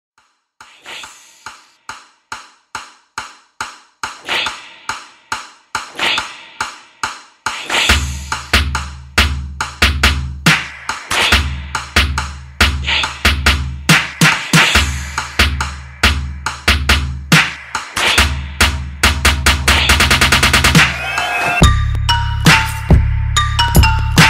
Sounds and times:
Drum: 0.6s - 24.2s.

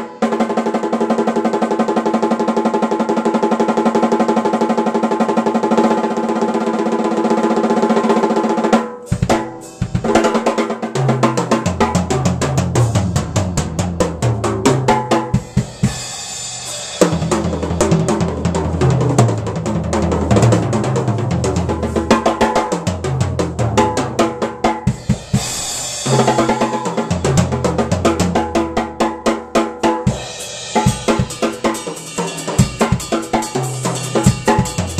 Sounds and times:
Drum: 0.0s - 34.9s
Drum kit: 0.0s - 34.9s.

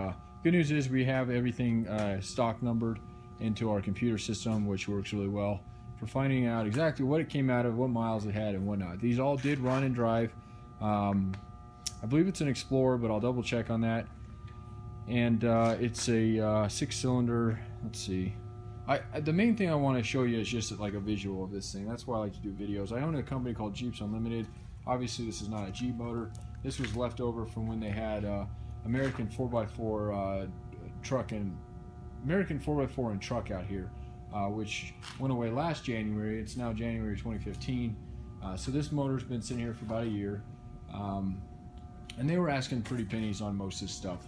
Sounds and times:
Speech: 0.0s - 14.1s, 15.1s - 31.6s, 32.2s - 41.4s, 42.1s - 44.2s.

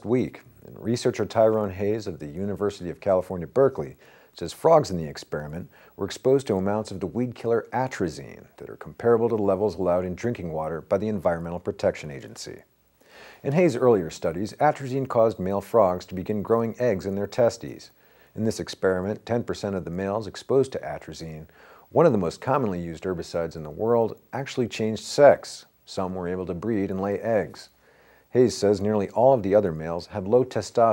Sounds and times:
Speech: 0.0s - 12.7s, 13.4s - 30.9s.

